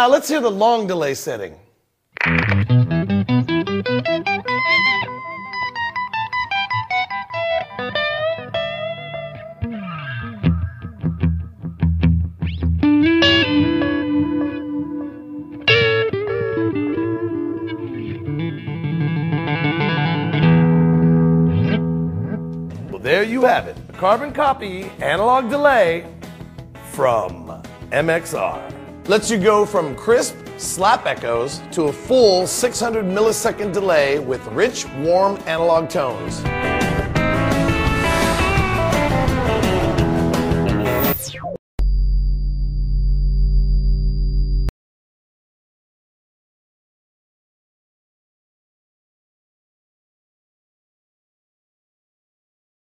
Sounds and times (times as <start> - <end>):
Guitar: 2.1 - 41.6
Effects unit: 2.2 - 23.0, 36.0 - 44.7.